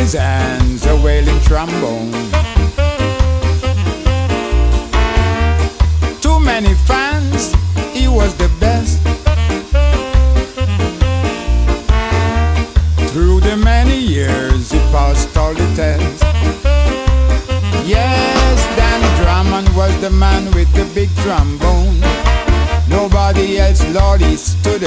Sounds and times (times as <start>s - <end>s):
Music: 0.0s - 24.8s.